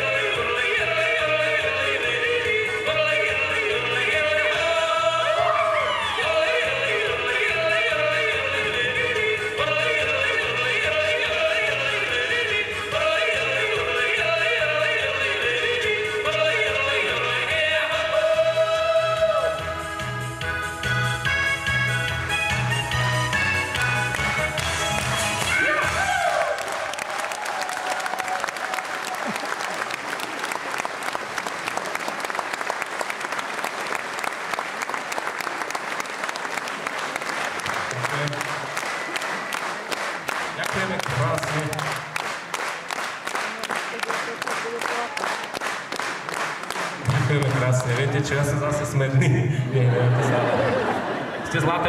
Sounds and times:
Music: 0.0 - 27.2, 37.7 - 49.4
Applause: 23.7 - 48.2.

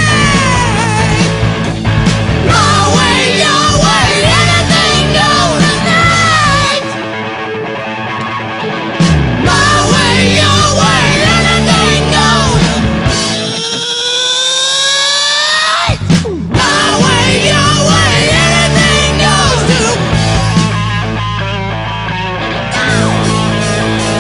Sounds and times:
Grunge: 0.0 - 24.2.

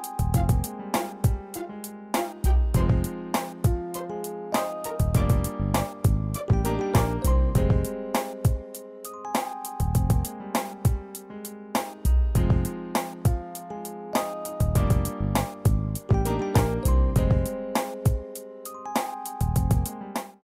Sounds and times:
Music: 0.0 - 20.4.

